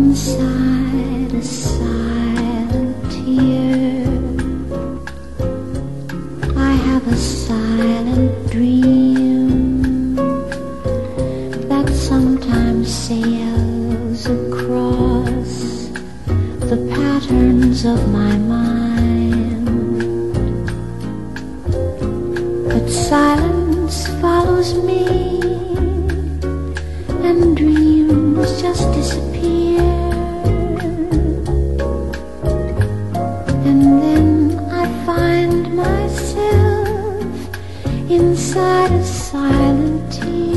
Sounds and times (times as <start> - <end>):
Music: 0.0 - 40.5.